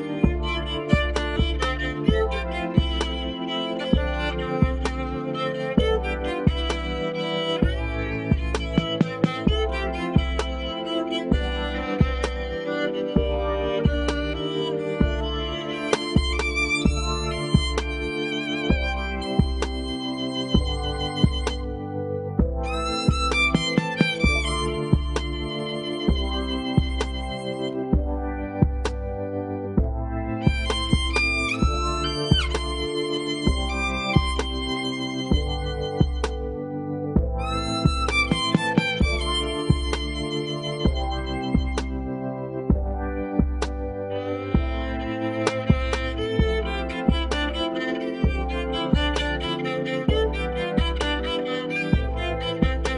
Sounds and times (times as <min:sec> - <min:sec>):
Violin, fiddle: 0:00.0 - 0:52.9.